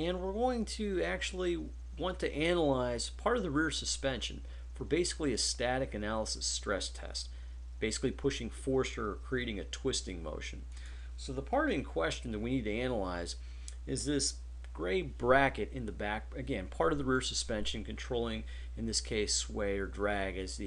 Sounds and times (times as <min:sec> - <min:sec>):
Speech: 0:00.0 - 0:20.6.